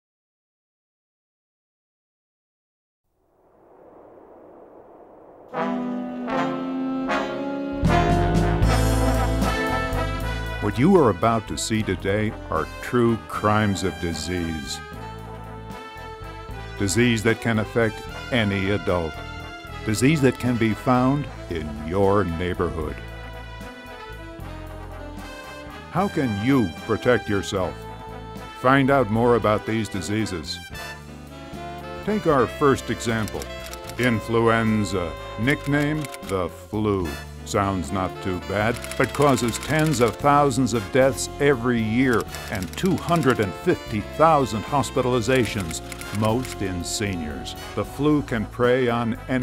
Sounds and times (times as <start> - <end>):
Trombone: 5.5 - 36.2.